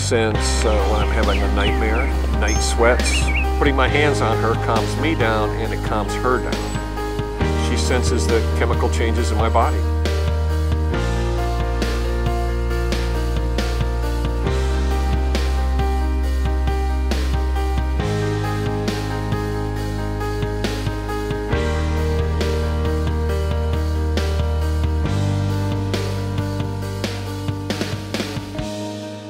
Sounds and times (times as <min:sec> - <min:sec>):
Speech: 0:00.0 - 0:06.8, 0:07.6 - 0:09.9
Music: 0:00.0 - 0:29.2.